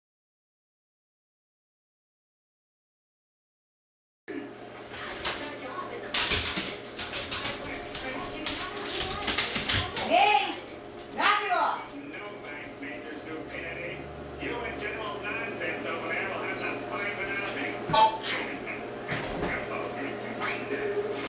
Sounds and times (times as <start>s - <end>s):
Speech: 4.3s - 18.8s, 19.4s - 21.2s.